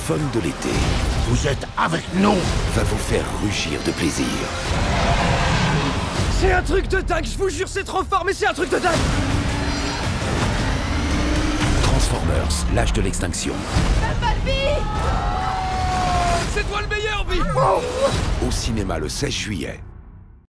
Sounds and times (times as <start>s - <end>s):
Speech: 0.0s - 4.5s, 6.3s - 9.0s, 11.8s - 14.9s, 16.5s - 19.9s
Music: 0.0s - 20.4s.